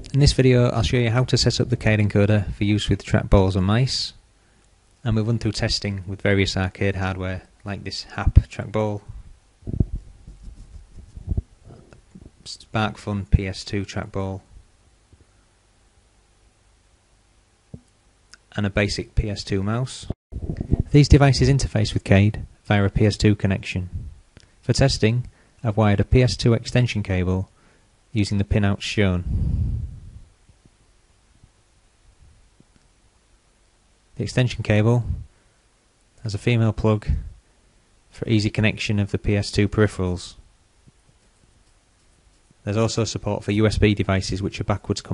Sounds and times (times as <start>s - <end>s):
Speech: 0.0s - 4.2s, 5.0s - 9.1s, 12.4s - 14.5s, 18.4s - 20.2s, 20.9s - 24.0s, 24.6s - 27.5s, 28.1s - 29.3s, 34.2s - 35.3s, 36.2s - 37.4s, 38.1s - 40.4s, 42.6s - 45.1s.